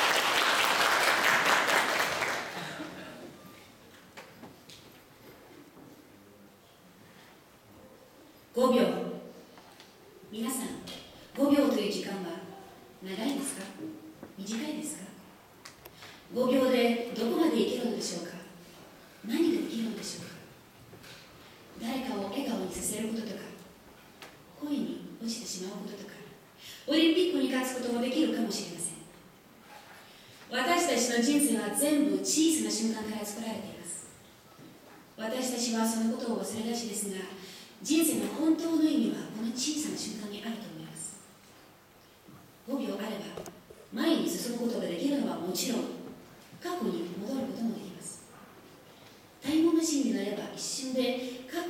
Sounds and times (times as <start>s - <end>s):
Narration, monologue: 7.4s - 51.6s
Female speech, woman speaking: 8.5s - 9.3s, 10.3s - 15.2s, 16.3s - 18.6s, 19.2s - 20.4s, 21.8s - 23.7s, 24.6s - 29.1s, 30.5s - 34.1s, 35.2s - 41.2s, 42.7s - 48.3s, 49.4s - 51.6s.